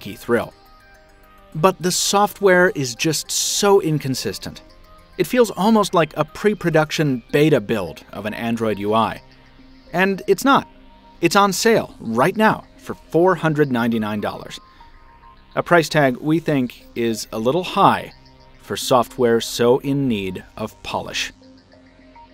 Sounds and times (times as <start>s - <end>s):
Music: 0.0s - 22.3s
Narration, monologue: 0.0s - 22.3s.